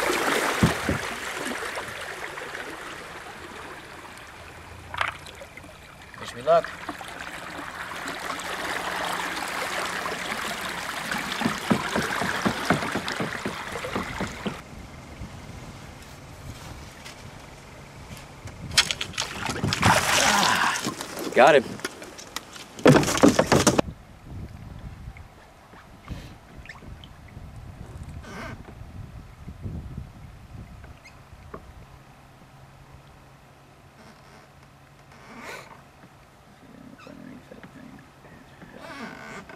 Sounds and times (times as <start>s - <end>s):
Boat, Water vehicle: 0.0s - 39.5s
Speech: 6.2s - 6.7s, 21.3s - 21.7s, 36.6s - 38.8s.